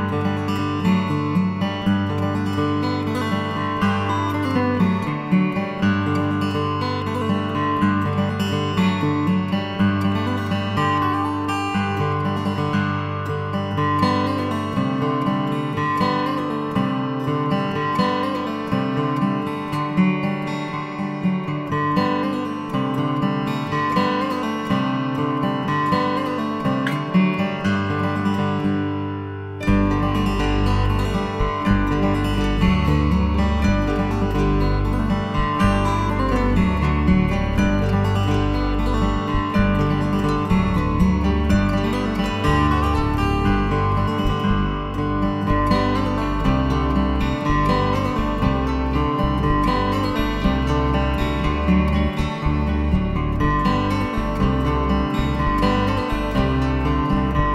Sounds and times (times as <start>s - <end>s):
Music: 0.0s - 57.5s.